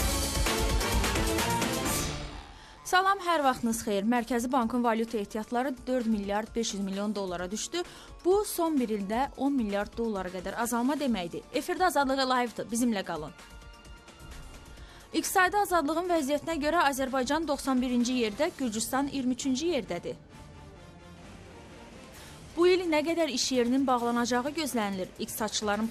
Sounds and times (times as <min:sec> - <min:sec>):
Music: 0:00.0 - 0:25.9
Speech: 0:02.9 - 0:13.3, 0:15.2 - 0:20.2, 0:22.6 - 0:25.9.